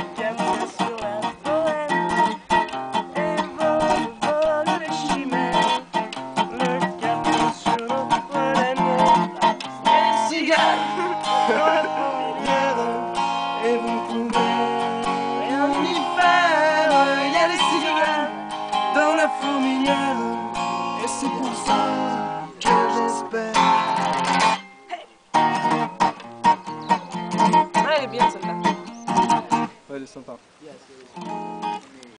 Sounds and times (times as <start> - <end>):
Music: 0.0 - 29.8, 31.2 - 31.8.